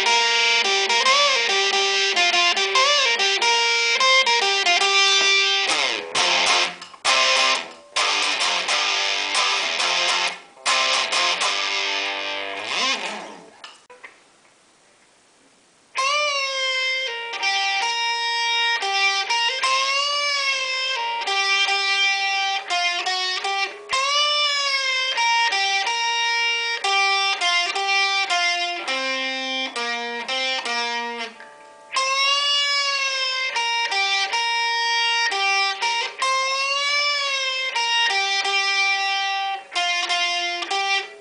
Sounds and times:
Electric guitar: 0.0s - 14.1s, 15.9s - 41.2s.

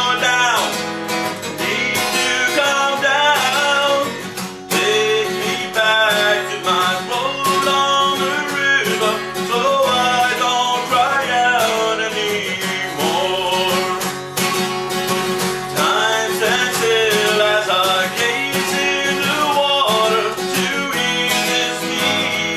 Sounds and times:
Music: 0.0s - 22.5s.

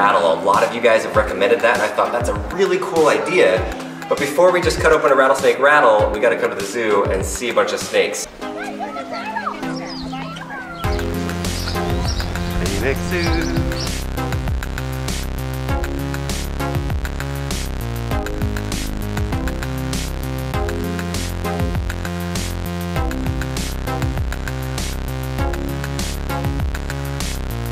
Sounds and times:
Music: 0.0s - 27.7s.

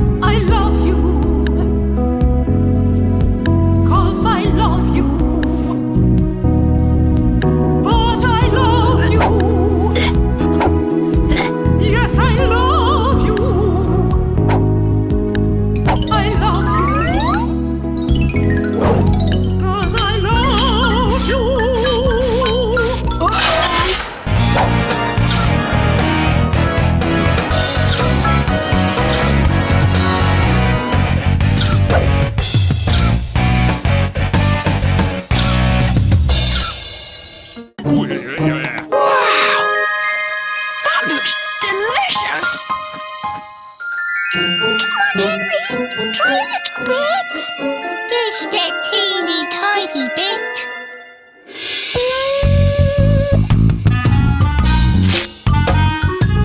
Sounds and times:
Music: 0.0s - 56.4s
Speech: 40.8s - 42.7s, 46.1s - 47.5s, 48.1s - 50.7s.

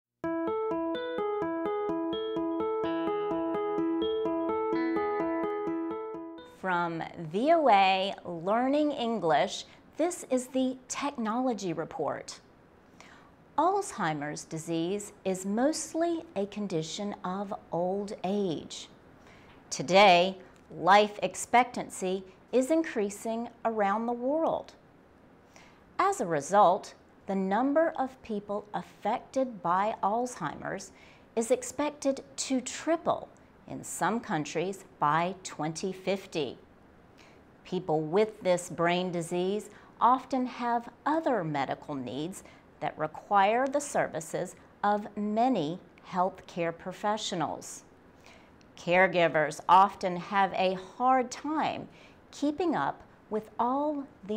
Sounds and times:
Electric piano: 0.2s - 6.6s
Speech: 6.6s - 12.4s, 13.6s - 18.9s, 19.7s - 24.8s, 26.0s - 36.6s, 37.7s - 47.8s, 48.8s - 54.3s.

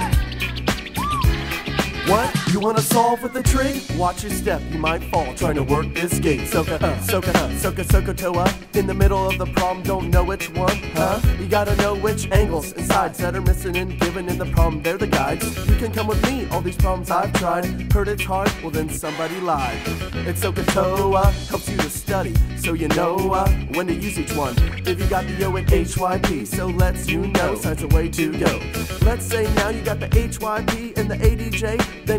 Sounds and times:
Rapping: 1.5s - 32.1s.

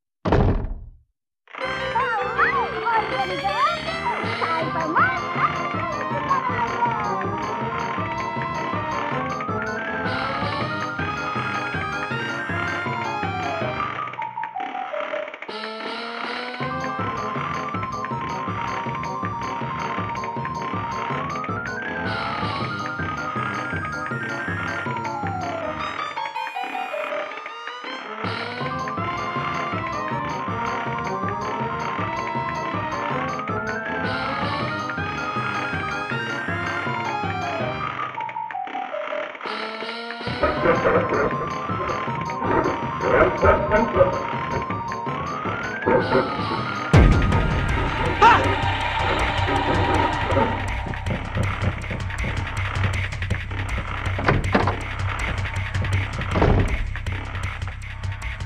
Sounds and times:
Music: 1.5s - 58.4s.

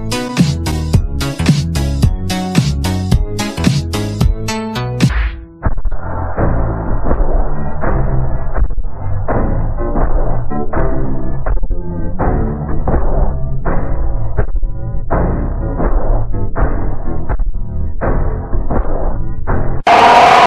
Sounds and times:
Music: 0.0s - 20.4s.

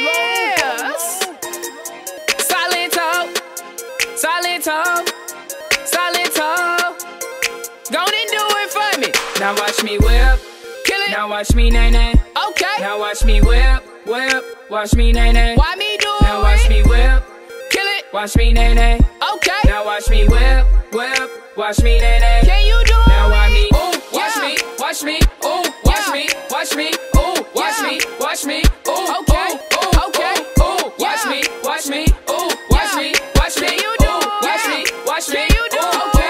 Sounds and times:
Music: 0.0s - 36.2s.

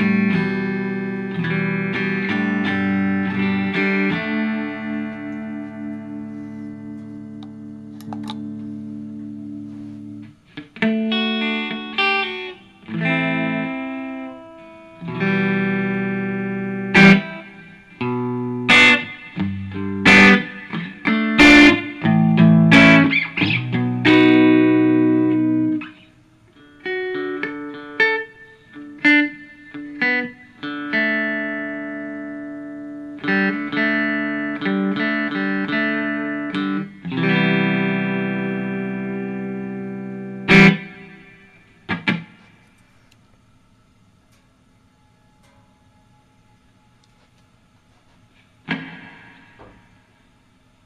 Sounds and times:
Electric guitar: 0.0s - 43.5s, 48.1s - 50.8s.

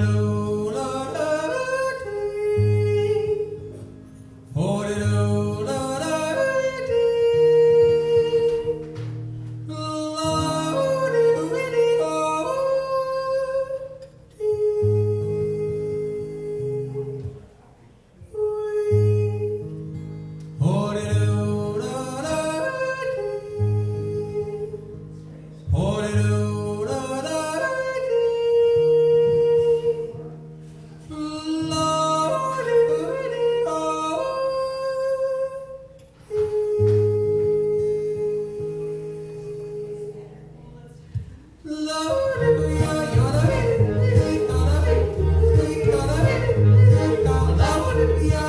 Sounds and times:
Music: 0.0s - 48.4s.

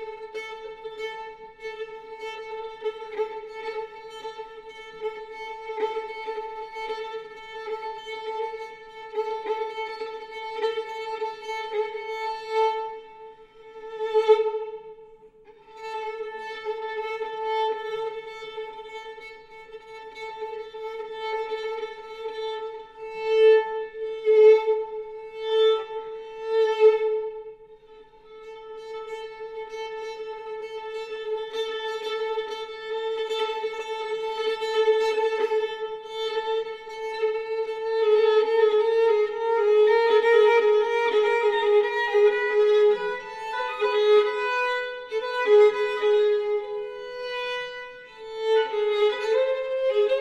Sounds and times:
Violin, fiddle: 0.0s - 50.2s.

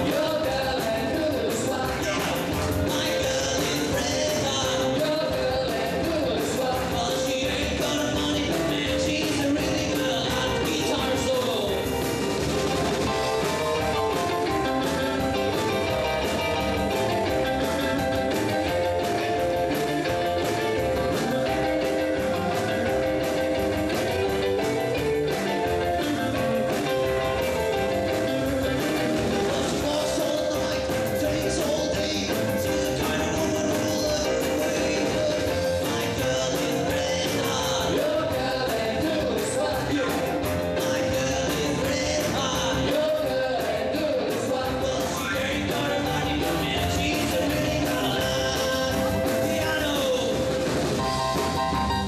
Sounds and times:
Music: 0.0s - 52.0s.

